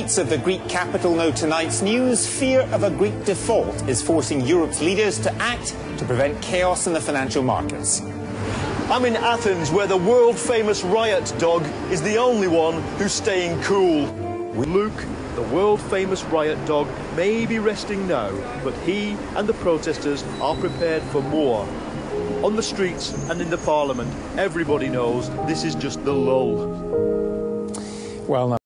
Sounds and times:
Music: 0.0 - 28.6
Speech: 8.9 - 21.7, 28.3 - 28.6.

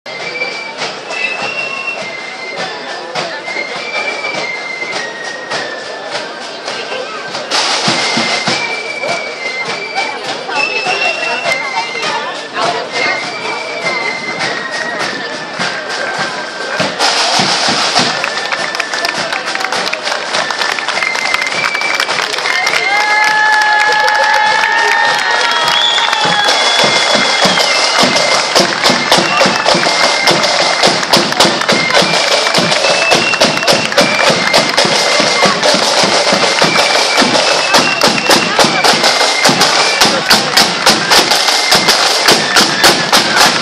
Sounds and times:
Music: 0.1 - 43.6
Speech: 0.1 - 43.6.

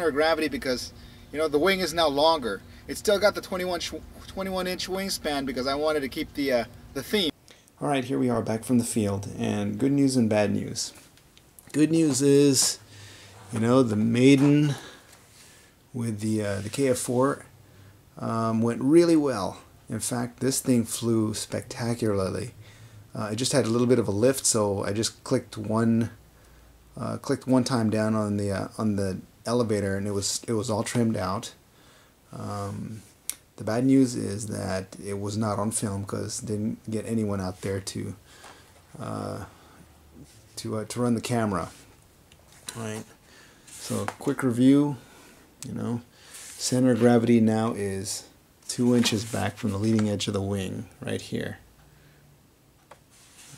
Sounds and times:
Speech: 0.0 - 11.1, 11.7 - 12.8, 13.5 - 14.9, 15.9 - 17.5, 18.2 - 22.6, 23.2 - 26.2, 27.0 - 31.6, 32.3 - 38.2, 38.9 - 39.5, 40.6 - 41.9, 42.6 - 43.2, 43.8 - 45.0, 45.6 - 51.7.

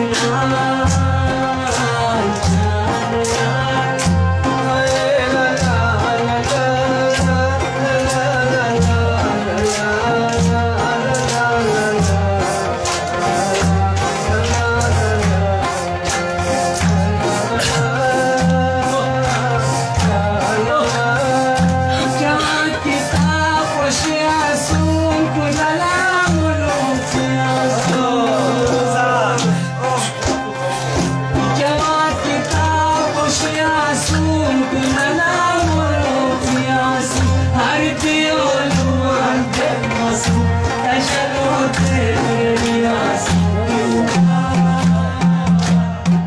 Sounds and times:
Male singing: 0.0 - 30.6, 31.5 - 46.2
Music: 0.0 - 46.2.

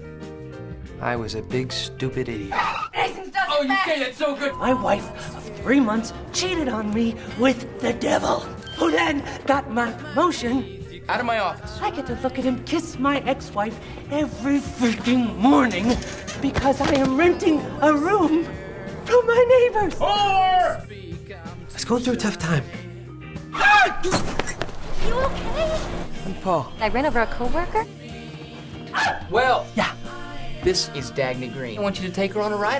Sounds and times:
Music: 0.0 - 32.7.

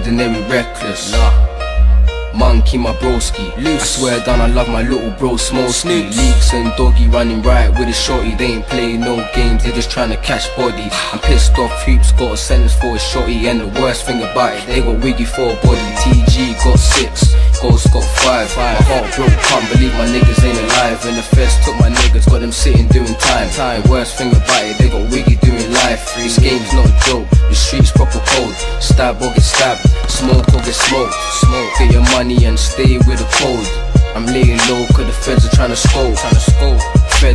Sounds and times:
Music: 0.0 - 37.3.

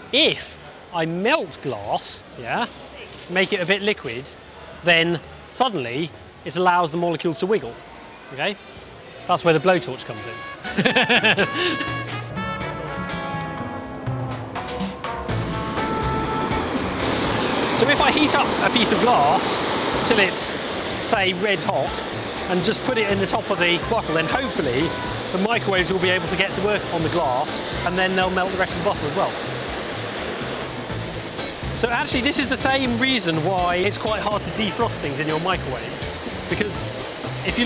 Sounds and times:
Speech: 17.8 - 29.3, 31.8 - 35.9, 36.5 - 37.6.

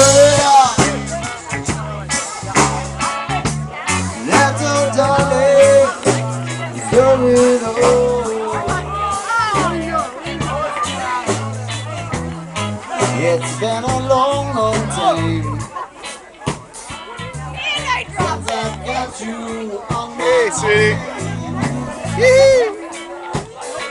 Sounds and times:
Music: 0.0 - 23.9
Speech: 0.0 - 23.9.

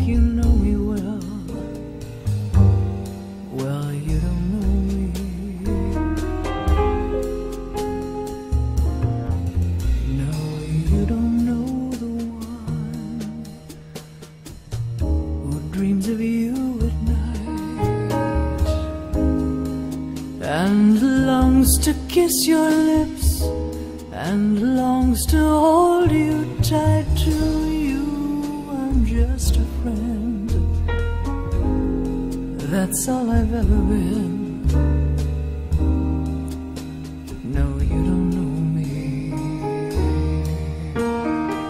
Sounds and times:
Soul music: 0.0 - 41.7.

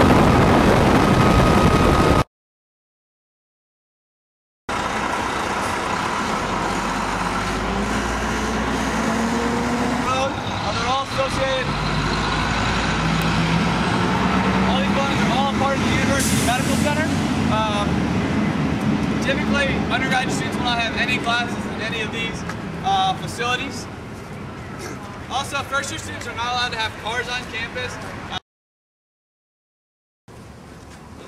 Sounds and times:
Outside, rural or natural: 0.0 - 2.3, 4.7 - 28.4, 30.3 - 31.2
Speech: 10.1 - 11.7, 14.7 - 17.9, 19.2 - 23.9, 24.8 - 28.4.

